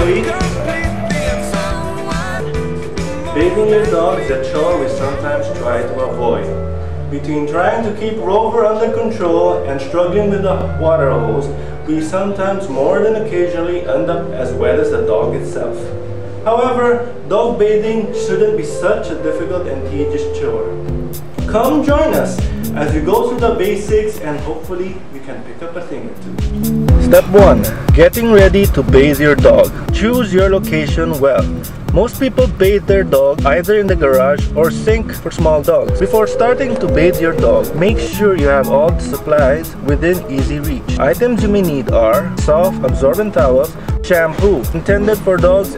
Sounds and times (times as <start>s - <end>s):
Speech: 0.0s - 0.5s, 3.4s - 20.7s, 21.5s - 26.2s, 27.0s - 45.7s
Music: 0.0s - 25.2s, 26.0s - 45.7s.